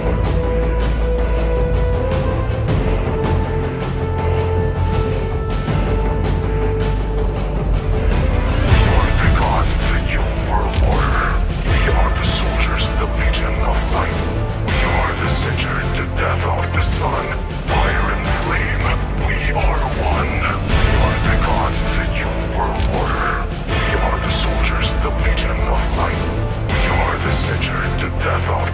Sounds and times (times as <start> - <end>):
Music: 0.0 - 28.7
Speech synthesizer: 8.7 - 28.7.